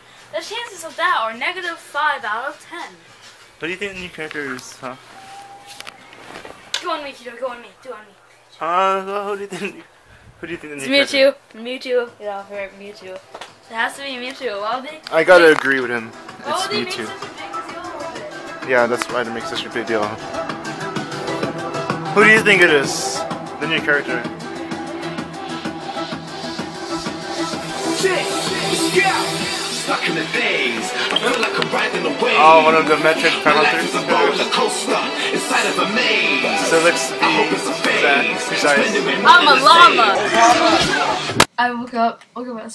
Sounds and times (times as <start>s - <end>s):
Music: 13.8s - 41.5s.